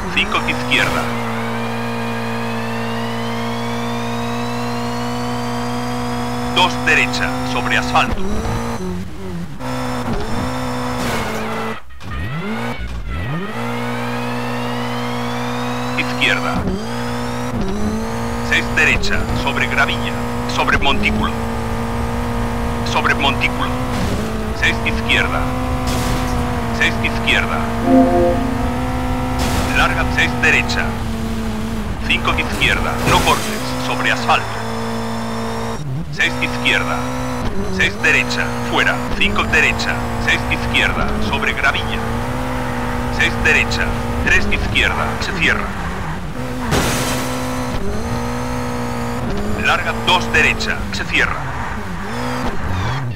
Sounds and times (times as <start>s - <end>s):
Speech: 0.0s - 1.2s, 6.5s - 8.3s, 16.0s - 16.7s, 18.5s - 21.4s, 22.8s - 23.8s, 24.6s - 25.5s, 26.8s - 28.6s, 29.7s - 31.0s, 32.0s - 34.7s, 36.1s - 37.1s, 37.7s - 42.2s, 43.1s - 45.8s, 49.4s - 51.5s.